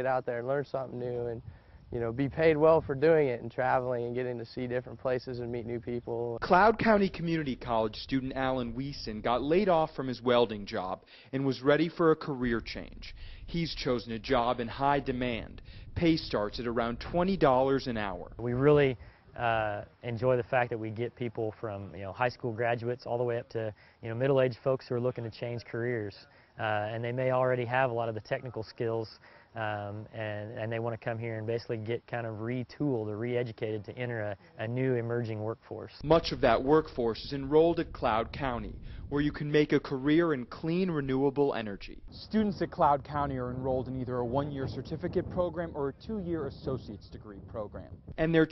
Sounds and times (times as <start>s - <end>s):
Speech: 0.0s - 48.5s.